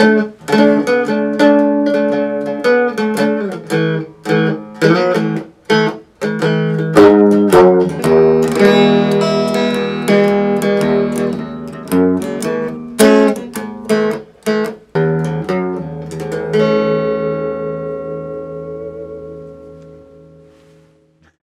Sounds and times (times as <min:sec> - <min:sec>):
Electric guitar: 0:00.0 - 0:21.4
Strum: 0:00.0 - 0:21.4.